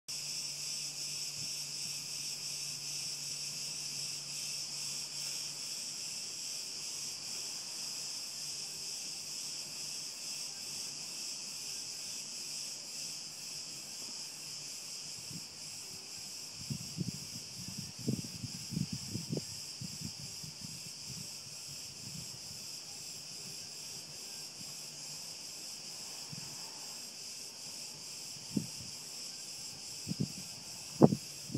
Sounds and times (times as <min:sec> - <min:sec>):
Cricket: 0:00.1 - 0:31.5.